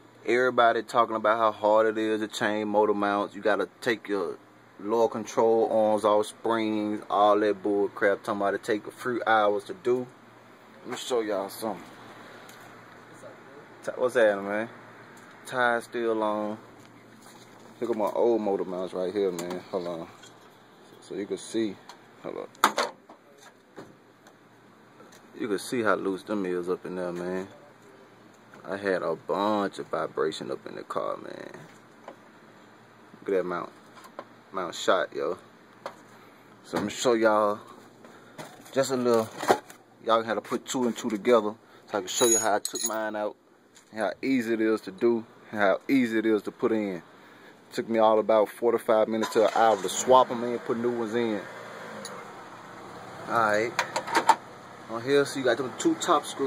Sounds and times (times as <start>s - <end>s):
Speech: 0.2s - 10.2s, 10.8s - 11.9s, 13.1s - 14.8s, 15.4s - 16.6s, 17.8s - 20.2s, 21.0s - 22.6s, 25.4s - 28.0s, 28.6s - 31.7s, 33.2s - 33.8s, 34.5s - 35.4s, 36.6s - 37.7s, 38.7s - 39.4s, 40.0s - 47.0s, 47.7s - 51.5s, 53.3s - 53.8s, 54.9s - 56.4s.